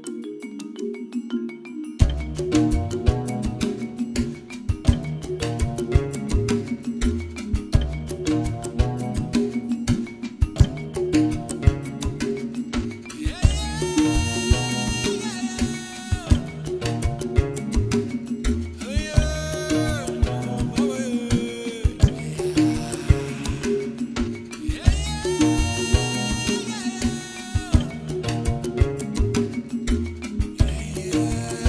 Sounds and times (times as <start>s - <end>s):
Middle Eastern music: 2.0s - 31.6s.